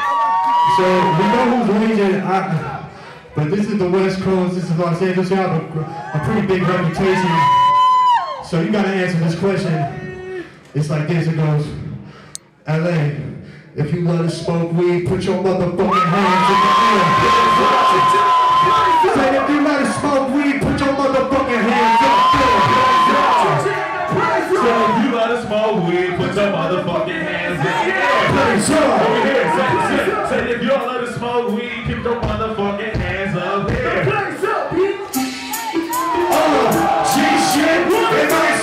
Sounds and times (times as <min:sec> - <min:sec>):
Speech: 0:03.4 - 0:07.5, 0:12.6 - 0:18.2, 0:19.0 - 0:35.0.